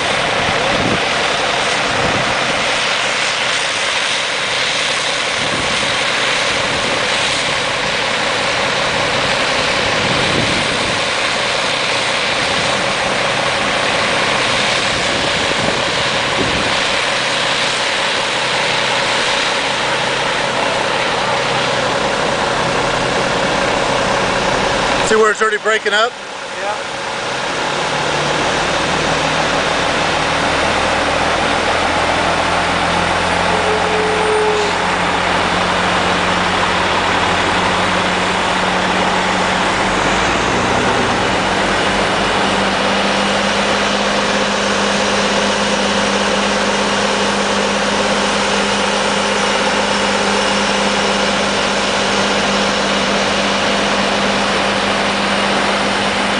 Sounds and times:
Truck: 0.0s - 56.3s
Speech: 25.0s - 26.8s.

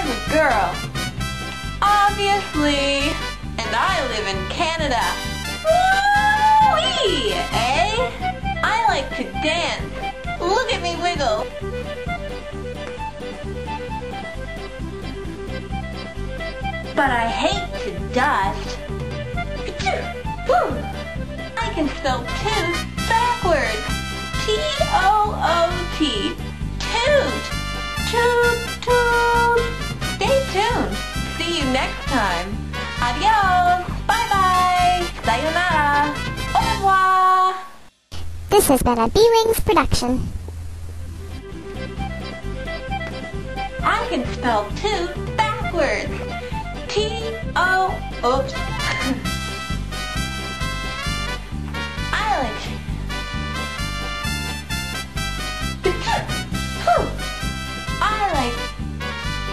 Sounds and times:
Speech: 0.0s - 0.8s, 1.8s - 5.1s, 6.7s - 9.8s, 10.4s - 11.4s, 17.0s - 18.7s, 21.6s - 27.4s, 28.1s - 37.6s, 38.5s - 40.3s, 43.8s - 46.1s, 46.9s - 49.1s, 52.1s - 52.7s, 58.0s - 58.7s
Music: 0.0s - 38.0s, 40.4s - 59.5s.

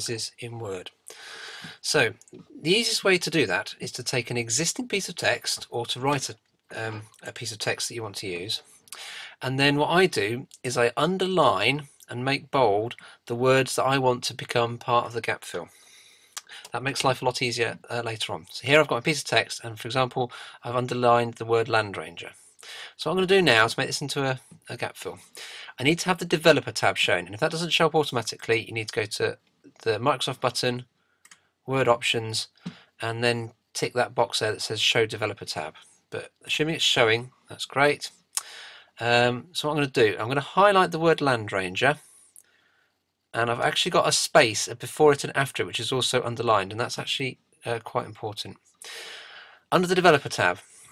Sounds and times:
Speech: 0.0s - 1.0s, 1.6s - 15.7s, 16.4s - 30.9s, 31.7s - 42.0s, 43.4s - 48.6s, 49.7s - 50.7s.

